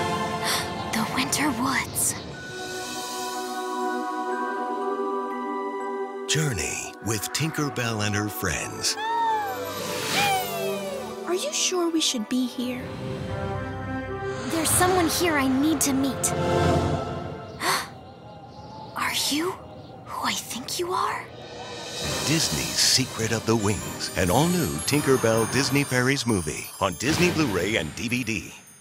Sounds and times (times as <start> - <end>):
Music: 0.0 - 28.8.